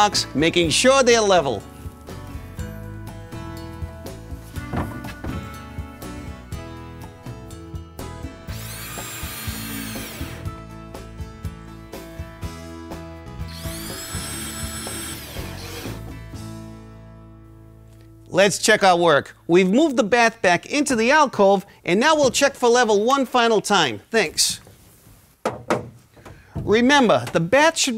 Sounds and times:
Music: 0.0 - 22.4.

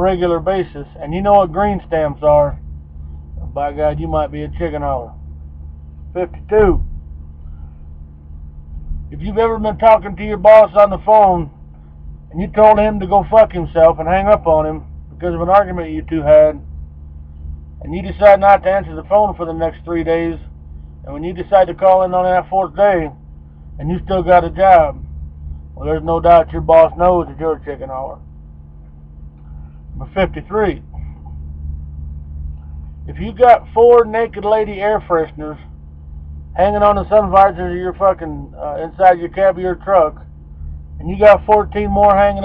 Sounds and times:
Speech: 0.0 - 2.6, 3.4 - 5.1, 6.1 - 6.8, 9.1 - 11.5, 12.3 - 16.6, 17.8 - 20.4, 21.1 - 23.2, 23.8 - 25.0, 25.8 - 28.2, 30.0 - 31.2, 33.1 - 35.6, 36.6 - 40.2, 41.0 - 42.4.

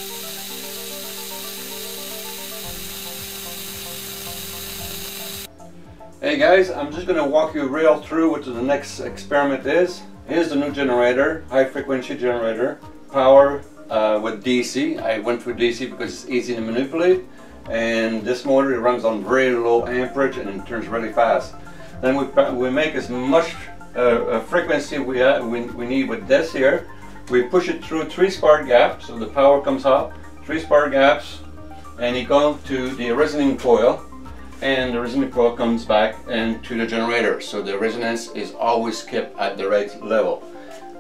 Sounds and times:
Music: 0.0 - 41.0
Speech: 6.2 - 34.0, 34.6 - 40.4.

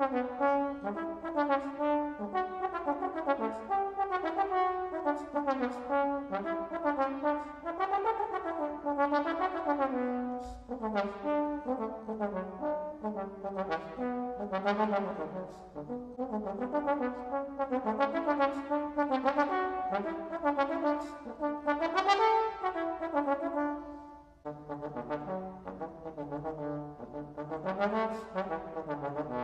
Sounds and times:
Trombone: 0.0 - 29.4.

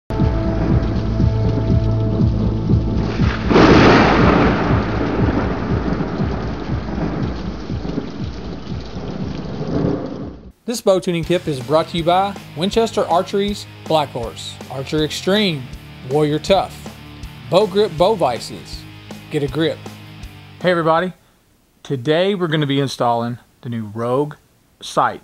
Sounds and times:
Rain: 0.1 - 10.6
Thunder: 0.2 - 10.5.

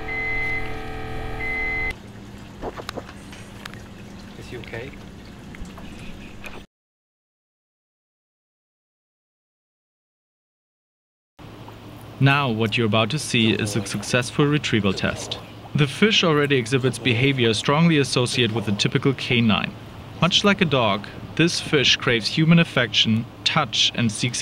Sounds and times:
Speech: 4.4 - 5.0, 12.2 - 24.4.

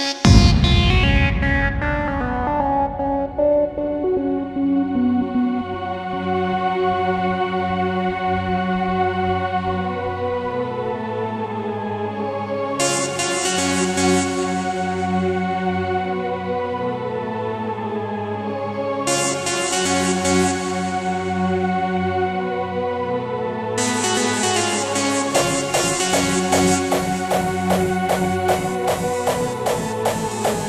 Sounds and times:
Electronic music: 0.0 - 6.6, 12.8 - 15.5, 19.1 - 21.6, 23.8 - 30.6.

